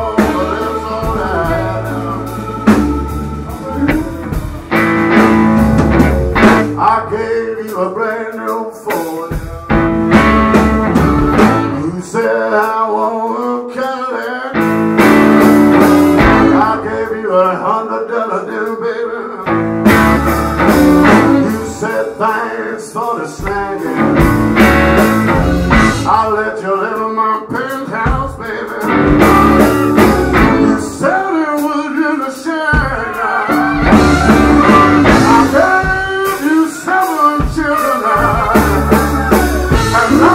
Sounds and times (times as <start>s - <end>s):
Singing: 0.0s - 4.1s, 10.9s - 14.6s, 16.4s - 19.5s, 20.2s - 24.0s, 26.1s - 40.3s
Drum kit: 0.0s - 13.6s, 14.6s - 17.2s, 19.5s - 40.3s
Blues: 0.0s - 40.3s
Guitar: 0.0s - 40.3s.